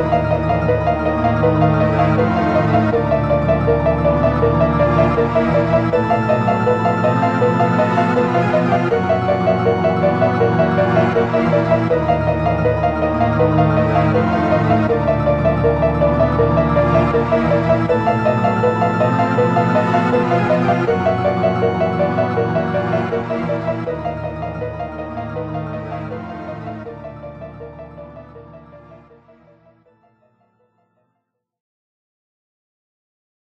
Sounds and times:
Background music: 0.0s - 31.0s.

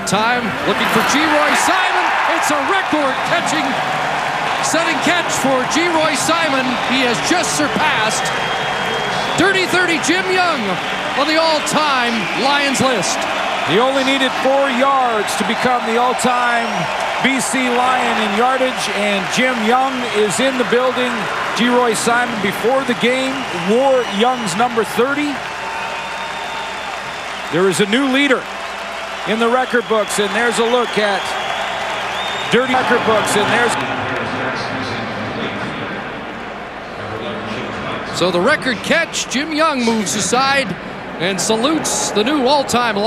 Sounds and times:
Speech: 0.0s - 3.8s, 4.6s - 8.3s, 9.1s - 25.4s, 27.5s - 28.4s, 29.3s - 31.4s, 32.5s - 36.1s, 37.0s - 43.0s.

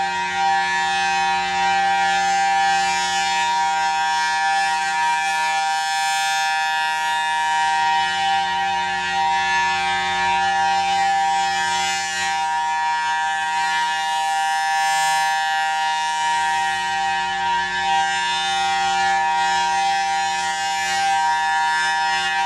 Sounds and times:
Civil defense siren: 0.0s - 22.4s.

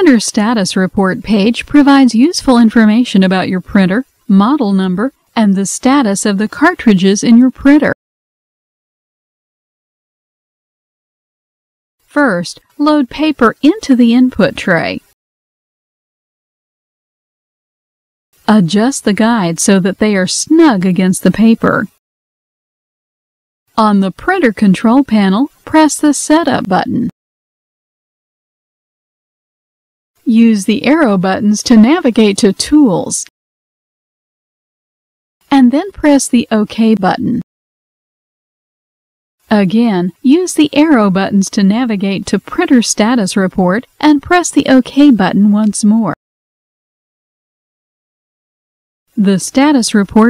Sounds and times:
Speech: 0.0s - 8.0s, 12.1s - 15.2s, 18.5s - 22.0s, 23.8s - 27.2s, 30.2s - 33.3s, 35.5s - 37.5s, 39.5s - 46.2s, 49.2s - 50.3s.

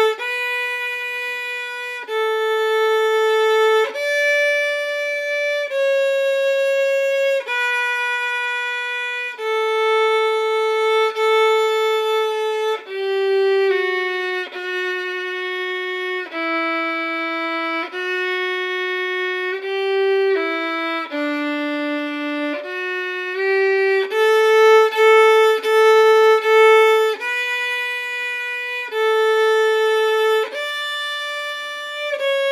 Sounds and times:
Violin, fiddle: 0.0s - 32.5s.

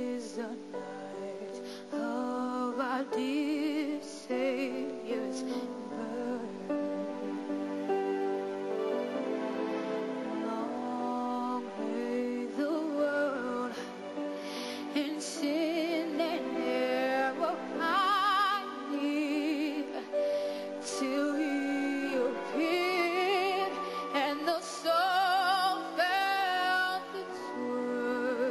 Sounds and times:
Female singing: 0.0s - 6.9s, 10.3s - 14.0s, 14.8s - 20.2s, 20.8s - 28.5s
Music: 0.0s - 28.5s.

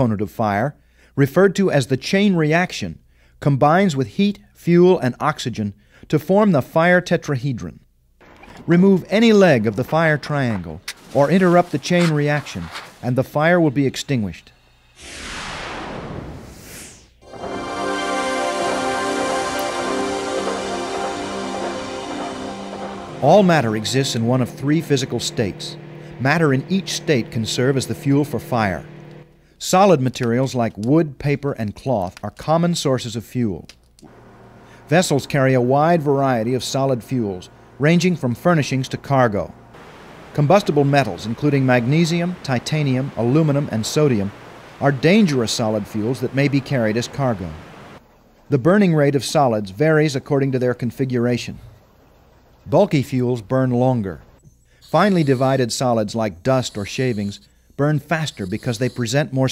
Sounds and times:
Speech: 0.0s - 7.9s, 8.7s - 14.6s, 23.2s - 28.9s, 29.6s - 33.7s, 34.9s - 39.5s, 40.3s - 47.6s, 48.5s - 51.8s, 52.7s - 54.3s, 54.9s - 59.5s
Music: 17.2s - 29.2s.

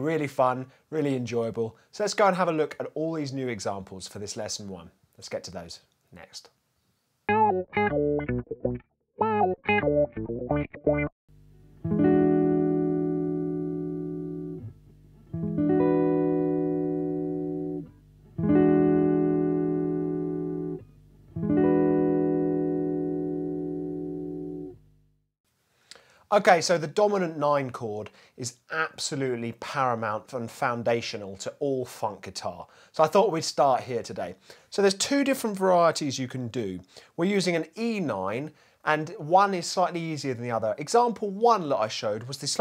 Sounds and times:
Speech: 0.0s - 6.6s, 26.3s - 42.6s.

